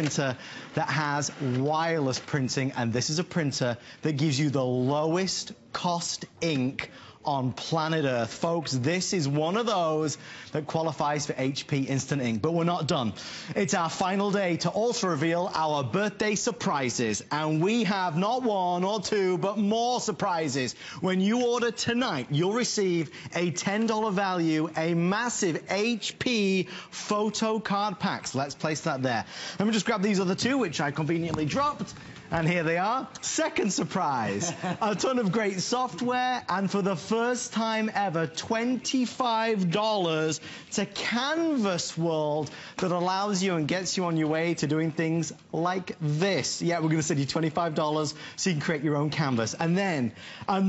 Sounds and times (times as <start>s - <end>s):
Speech: 0.0s - 50.6s.